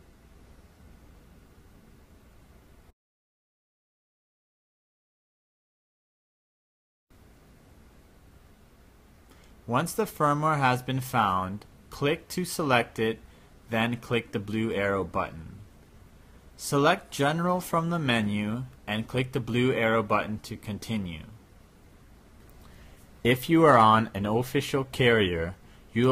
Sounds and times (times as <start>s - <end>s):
Silence: 0.0s - 3.0s, 7.1s - 9.7s, 15.5s - 17.1s, 21.3s - 23.3s
Speech: 9.7s - 15.7s, 16.6s - 21.4s, 23.2s - 26.1s.